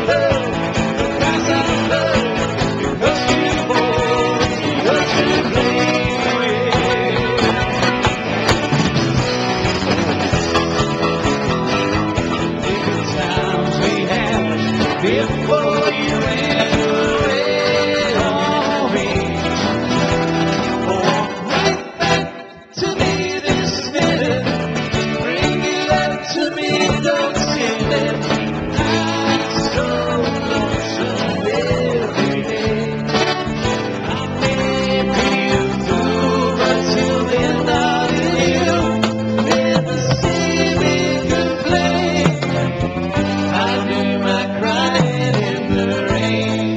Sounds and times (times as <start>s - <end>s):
Rock and roll: 0.0s - 46.7s.